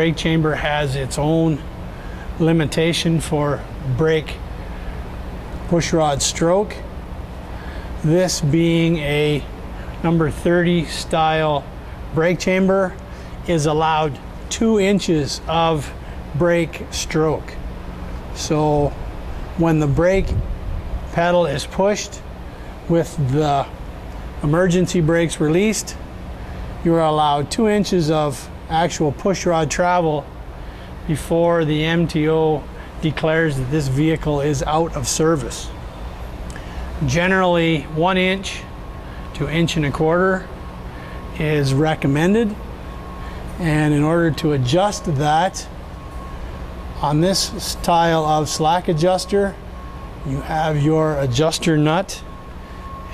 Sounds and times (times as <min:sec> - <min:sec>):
Speech: 0:00.0 - 0:01.6, 0:02.4 - 0:04.4, 0:05.7 - 0:06.9, 0:08.0 - 0:17.6, 0:18.4 - 0:19.0, 0:19.6 - 0:20.4, 0:21.1 - 0:22.2, 0:22.9 - 0:23.8, 0:24.4 - 0:26.0, 0:26.8 - 0:30.3, 0:31.1 - 0:35.8, 0:37.0 - 0:38.7, 0:39.4 - 0:40.5, 0:41.4 - 0:42.6, 0:43.6 - 0:45.7, 0:47.0 - 0:49.6, 0:50.2 - 0:52.3.